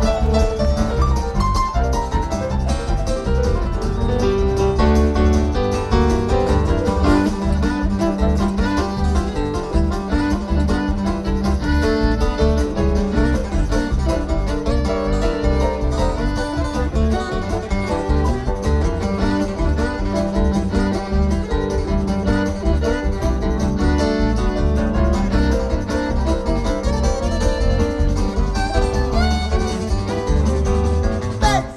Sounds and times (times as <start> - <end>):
Bluegrass: 0.0 - 31.7.